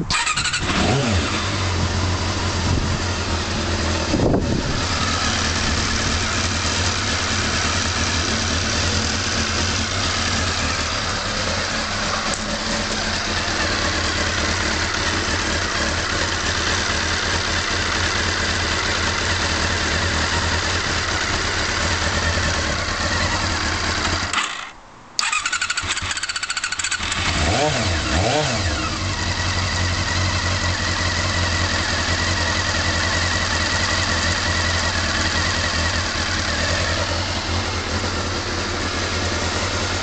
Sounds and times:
Idling: 0:00.0 - 0:40.0.

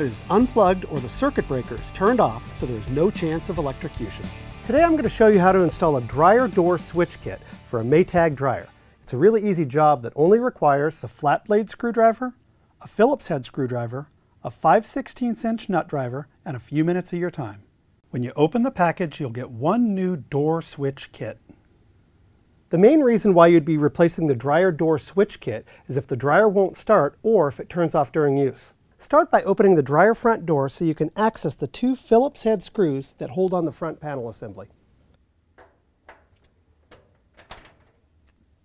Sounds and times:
Speech: 0:00.0 - 0:21.5, 0:22.7 - 0:34.7.

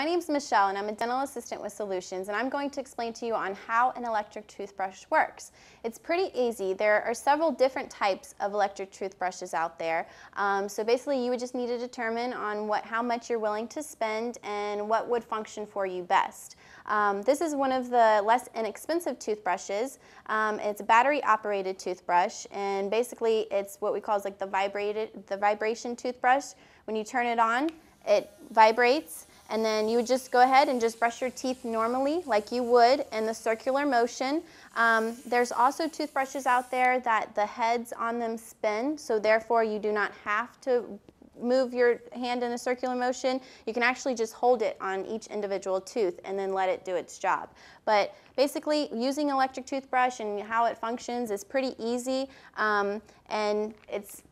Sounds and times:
Speech: 0:00.0 - 0:54.3
Electric toothbrush: 0:27.8 - 0:37.1.

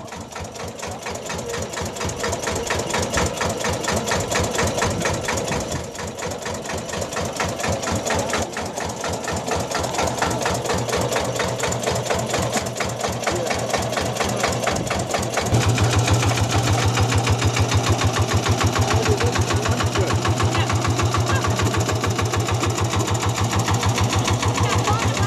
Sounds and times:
Speech: 0:13.2 - 0:14.4, 0:18.8 - 0:21.8, 0:24.4 - 0:25.2.

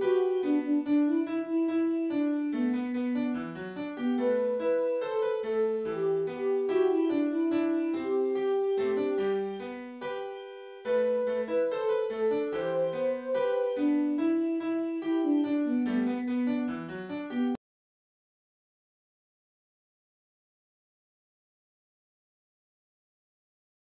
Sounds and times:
Tender music: 0:00.0 - 0:17.6.

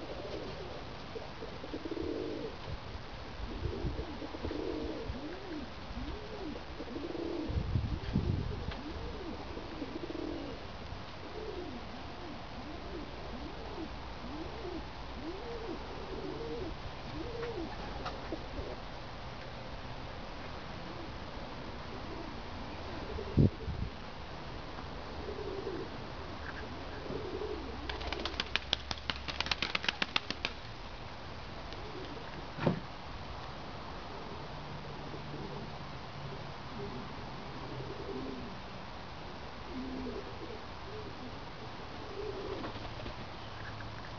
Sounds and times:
Pigeon, dove: 0:00.0 - 0:02.6, 0:03.5 - 0:10.6, 0:11.2 - 0:18.8, 0:25.1 - 0:30.6, 0:31.8 - 0:32.4, 0:36.3 - 0:38.6, 0:39.7 - 0:44.1
Outside, rural or natural: 0:00.0 - 0:44.1.

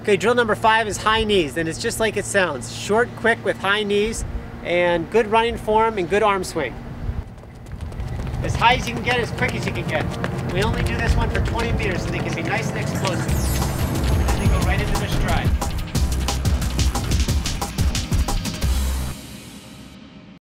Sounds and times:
Speech: 0:00.0 - 0:06.8, 0:08.4 - 0:13.3, 0:14.3 - 0:15.6
Run: 0:07.2 - 0:15.4
Music: 0:09.0 - 0:20.4.

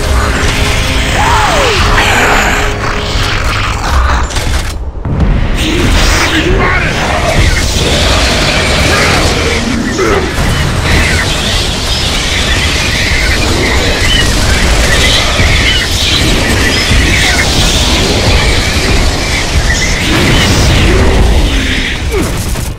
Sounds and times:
Speech: 0:05.6 - 0:08.0, 0:08.8 - 0:10.3
Fusillade: 0:07.0 - 0:22.7.

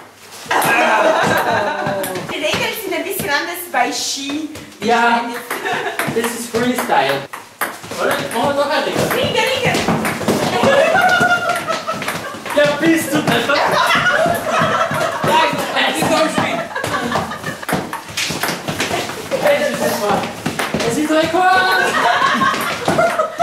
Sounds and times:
Speech: 0:15.3 - 0:16.6.

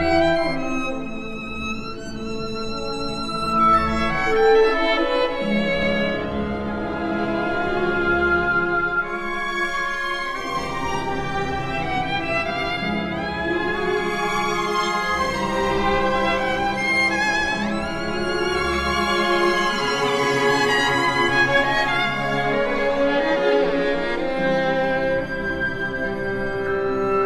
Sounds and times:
Violin, fiddle: 0:00.0 - 0:27.2.

